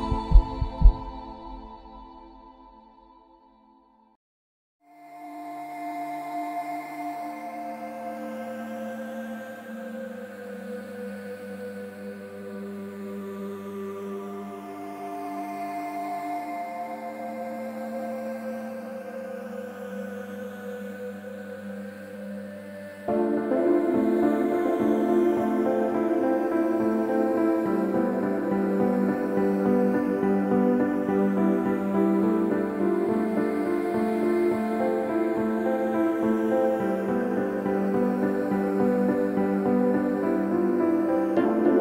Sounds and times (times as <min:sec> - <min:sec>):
Music: 0:00.0 - 0:04.2, 0:04.8 - 0:41.8.